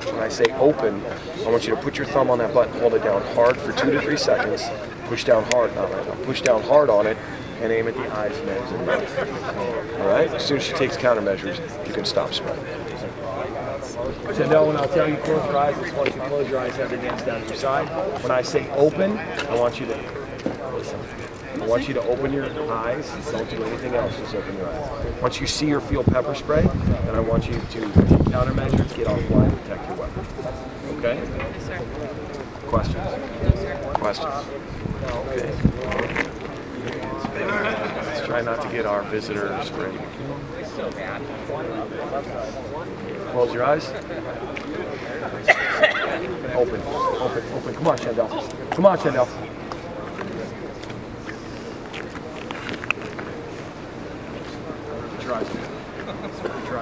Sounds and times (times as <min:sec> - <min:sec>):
Speech: 0:00.0 - 0:53.5, 0:54.1 - 0:56.8.